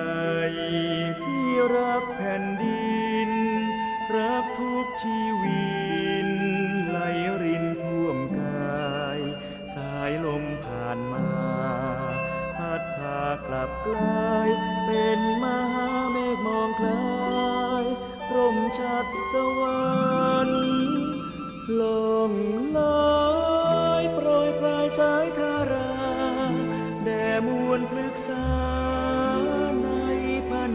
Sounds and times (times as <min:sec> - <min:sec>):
Music: 0:00.0 - 0:30.7.